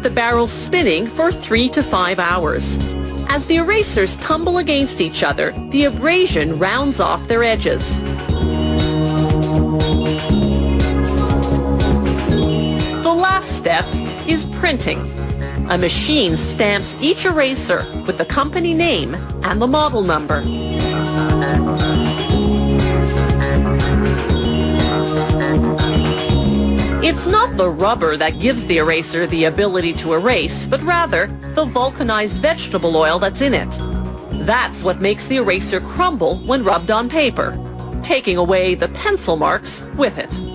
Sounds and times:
Speech: 0:00.0 - 0:08.0, 0:13.1 - 0:15.1, 0:15.7 - 0:20.4, 0:27.0 - 0:33.8, 0:34.4 - 0:40.4
Video game music: 0:20.4 - 0:26.9.

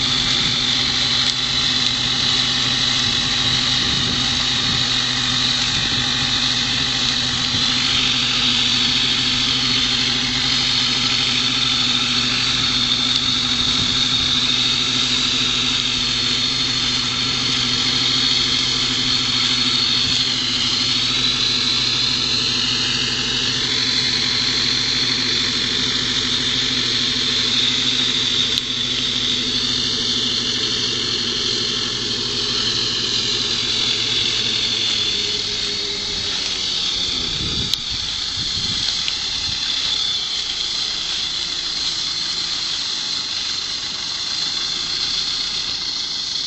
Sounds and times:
Hiss: 0:00.0 - 0:46.4.

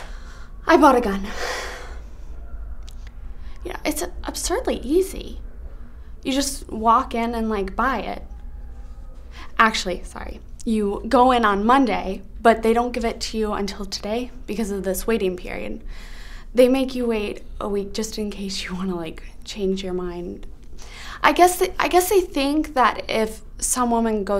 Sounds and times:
Speech: 0:00.7 - 0:01.3, 0:03.6 - 0:05.4, 0:06.2 - 0:08.2, 0:09.5 - 0:15.8, 0:16.6 - 0:20.5, 0:21.2 - 0:24.3.

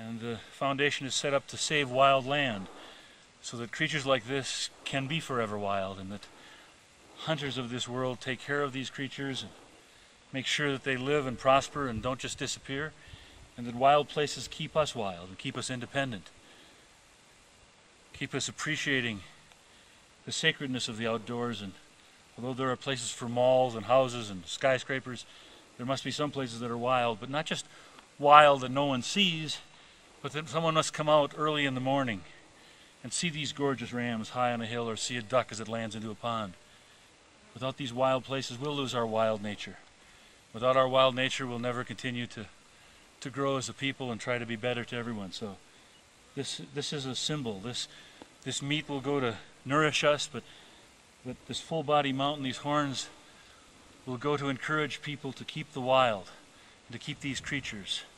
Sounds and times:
Speech: 0:00.0 - 0:02.8, 0:03.4 - 0:06.3, 0:07.2 - 0:09.6, 0:10.3 - 0:13.0, 0:13.6 - 0:16.3, 0:18.1 - 0:19.4, 0:20.2 - 0:21.8, 0:22.4 - 0:32.4, 0:33.0 - 0:36.6, 0:37.6 - 0:39.9, 0:40.5 - 0:42.6, 0:43.2 - 0:45.6, 0:46.4 - 0:50.5, 0:51.2 - 0:53.2, 0:54.0 - 0:58.1.

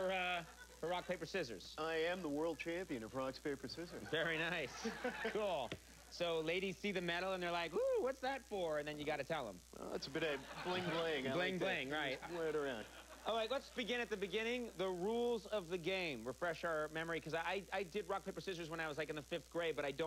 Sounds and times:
Speech: 0:00.0 - 0:20.0.

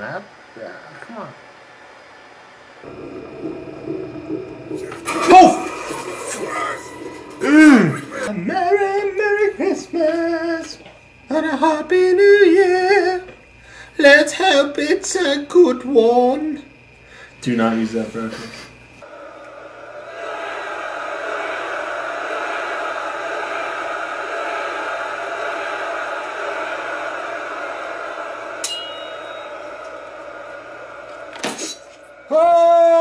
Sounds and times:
Speech: 0:17.4 - 0:18.6.

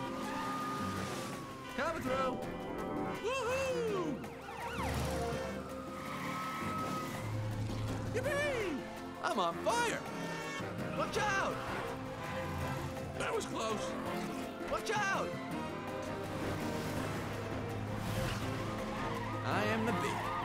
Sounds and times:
Car: 0:00.0 - 0:14.7, 0:15.5 - 0:20.4
Music: 0:00.0 - 0:20.4.

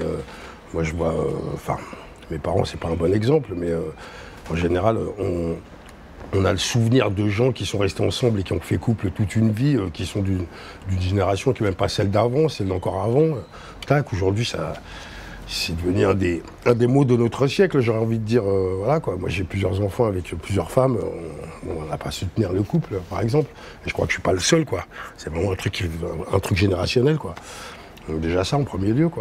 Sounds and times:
Speech: 0:00.0 - 0:05.7, 0:06.3 - 0:14.8, 0:15.5 - 0:27.4, 0:28.0 - 0:29.2.

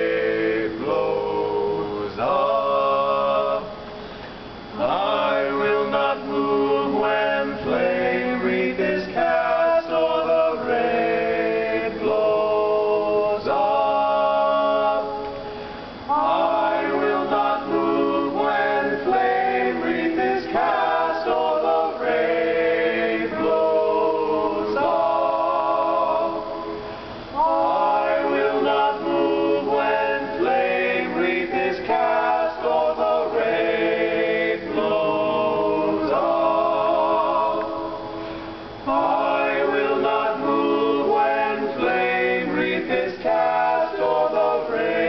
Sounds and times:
Music: 0:04.7 - 0:45.0.

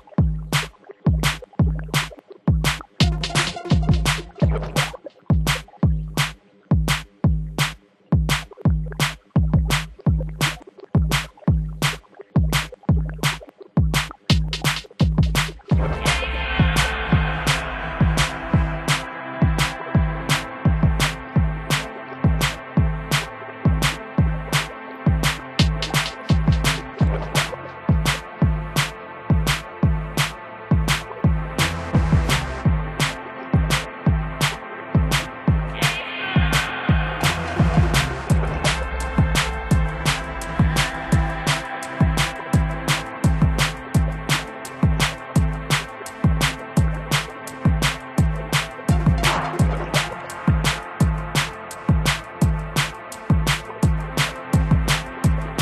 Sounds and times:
Bass drum: 0:00.0 - 0:55.6
Snare drum: 0:00.6 - 0:12.0, 0:14.0 - 0:22.6, 0:24.6 - 0:28.9, 0:29.5 - 0:55.6.

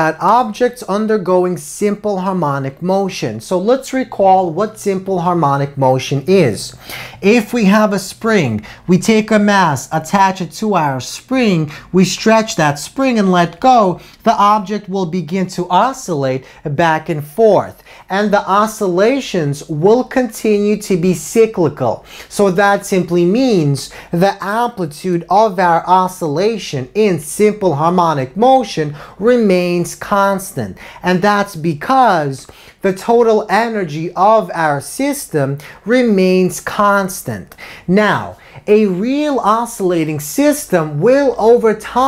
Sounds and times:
Speech: 0:00.0 - 0:42.0.

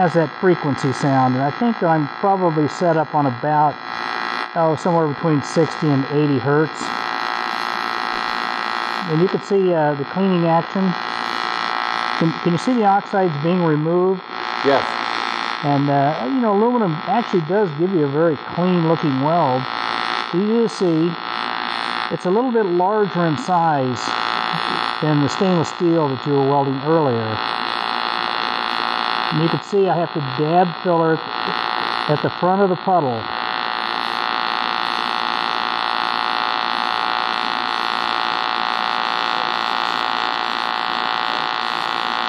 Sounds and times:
Speech: 0:00.0 - 0:03.8, 0:04.6 - 0:06.9, 0:09.0 - 0:11.0, 0:12.2 - 0:19.7, 0:20.4 - 0:21.2, 0:22.1 - 0:27.4, 0:29.3 - 0:33.3.

